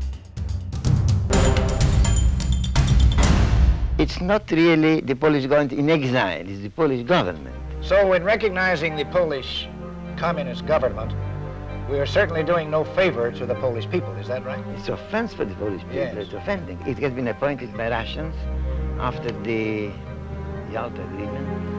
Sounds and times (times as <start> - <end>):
Music: 0.0 - 21.7
Speech: 4.0 - 11.1, 11.9 - 18.4, 19.0 - 20.0, 20.7 - 21.5.